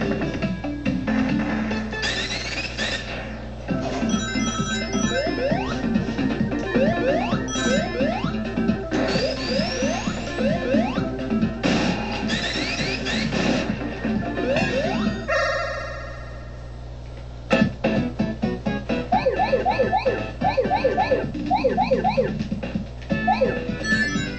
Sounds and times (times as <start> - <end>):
Music: 0.0 - 15.3, 17.5 - 24.3.